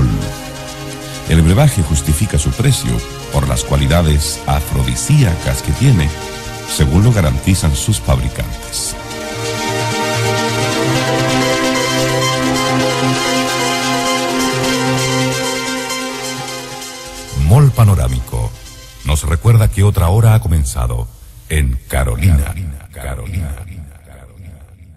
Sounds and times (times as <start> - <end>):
Speech: 0.0 - 0.3, 1.3 - 6.1, 6.7 - 9.0, 17.3 - 24.8
Music: 0.0 - 21.4.